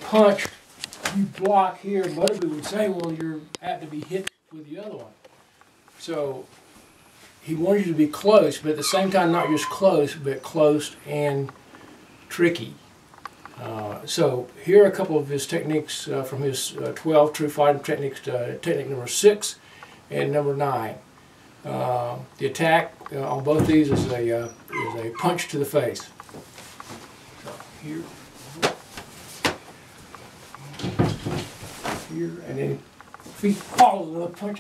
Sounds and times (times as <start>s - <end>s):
Speech: 0.0s - 5.2s, 6.0s - 6.5s, 7.4s - 11.6s, 12.3s - 12.8s, 13.6s - 21.0s, 21.6s - 26.1s, 27.4s - 28.7s, 32.1s - 34.6s.